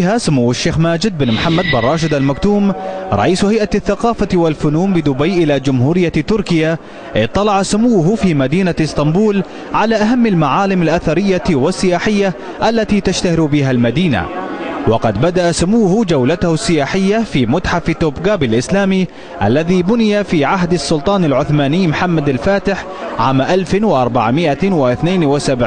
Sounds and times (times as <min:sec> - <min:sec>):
Speech: 0:00.0 - 0:25.6.